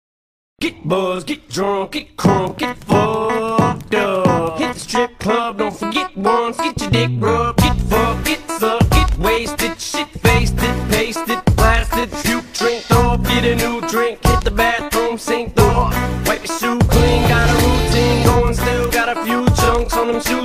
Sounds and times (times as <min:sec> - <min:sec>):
Hip hop music: 0:00.6 - 0:20.4
Rapping: 0:00.6 - 0:20.4.